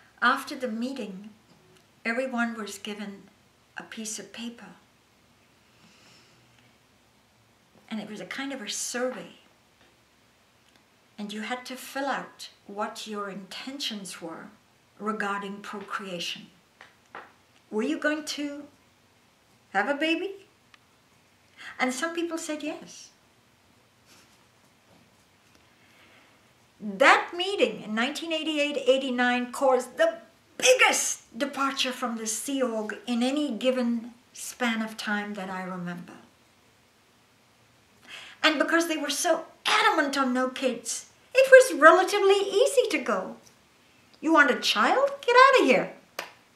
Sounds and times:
Speech: 0:00.2 - 0:01.4, 0:02.0 - 0:04.8, 0:07.9 - 0:09.4, 0:11.2 - 0:16.5, 0:17.7 - 0:18.8, 0:19.7 - 0:20.5, 0:21.7 - 0:23.2, 0:26.8 - 0:36.3, 0:38.4 - 0:43.4, 0:44.2 - 0:46.0.

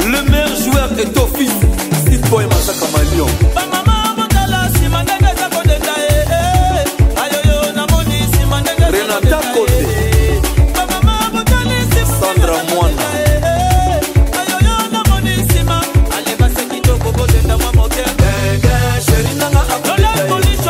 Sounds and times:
Afrobeat: 0:00.0 - 0:20.6.

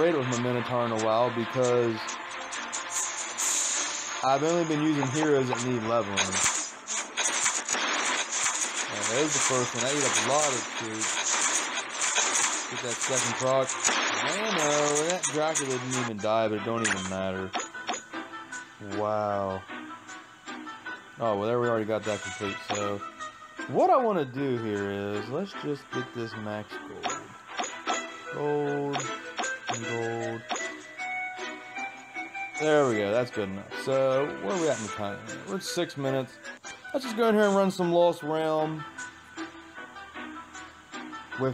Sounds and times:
Speech: 0:00.0 - 0:02.0, 0:04.2 - 0:06.4, 0:09.0 - 0:11.1, 0:12.8 - 0:17.5, 0:18.8 - 0:19.6, 0:21.2 - 0:23.0, 0:23.7 - 0:27.2, 0:28.4 - 0:29.1, 0:29.7 - 0:30.4, 0:32.6 - 0:36.3, 0:37.0 - 0:38.8
Music: 0:00.0 - 0:41.5.

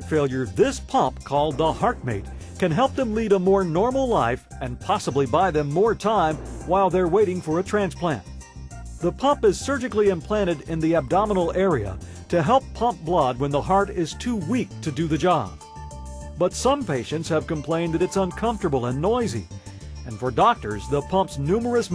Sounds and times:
Speech: 0:00.0 - 0:08.2, 0:09.0 - 0:15.6, 0:16.4 - 0:19.4, 0:20.1 - 0:21.9
Music: 0:00.0 - 0:21.9.

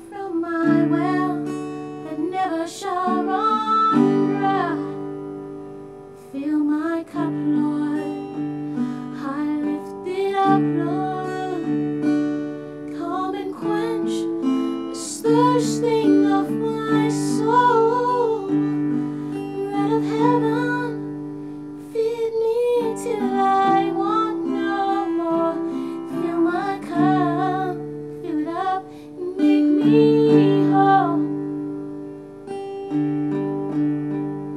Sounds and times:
Music: 0:00.0 - 0:34.5.

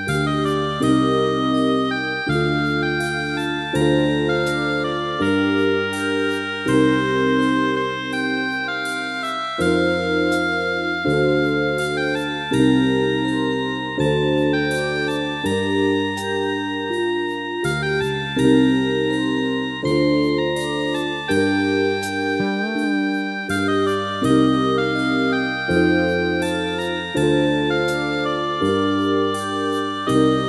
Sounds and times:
Soul music: 0:00.0 - 0:30.4.

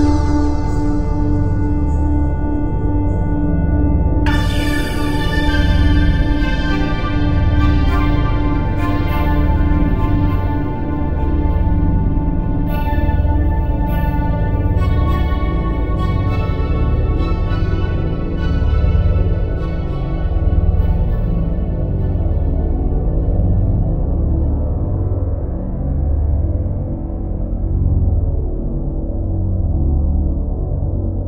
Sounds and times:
Ambient music: 0:00.0 - 0:31.2.

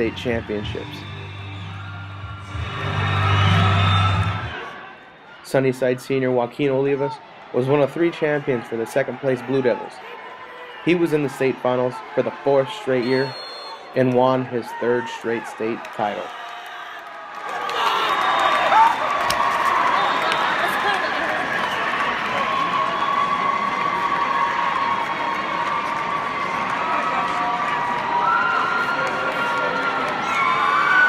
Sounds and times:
Speech: 0:05.5 - 0:10.0, 0:10.9 - 0:13.4, 0:14.0 - 0:16.3.

